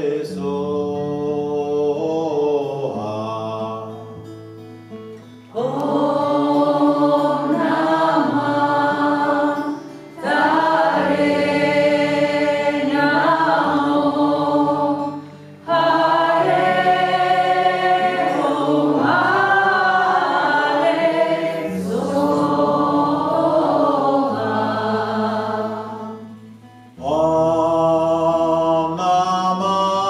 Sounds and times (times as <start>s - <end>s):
Mantra: 0.0s - 4.3s, 5.5s - 26.3s, 27.0s - 30.1s.